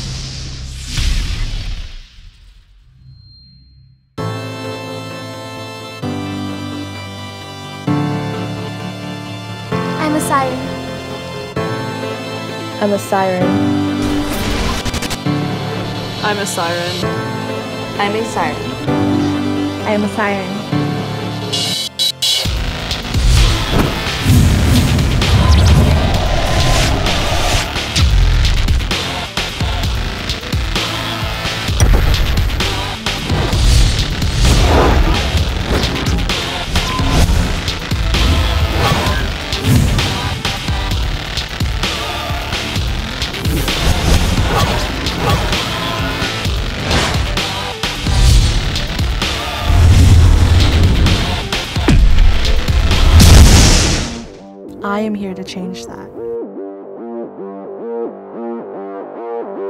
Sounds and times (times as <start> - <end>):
Music: 0.0 - 59.7.